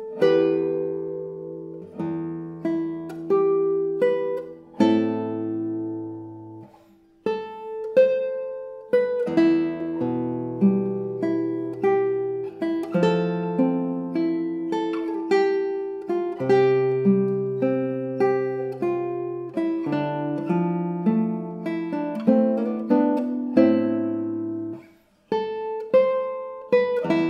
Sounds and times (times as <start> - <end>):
Acoustic guitar: 0.0 - 27.3
Strum: 0.0 - 27.3.